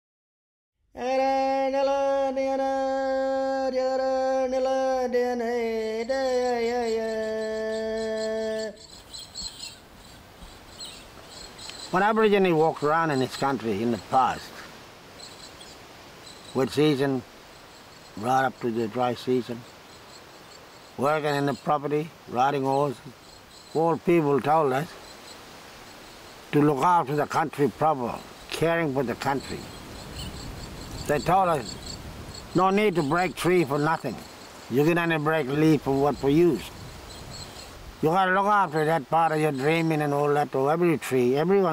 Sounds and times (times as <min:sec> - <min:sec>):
Bird vocalization, bird call, bird song: 0:06.2 - 0:14.5, 0:15.2 - 0:25.4, 0:28.0 - 0:40.4.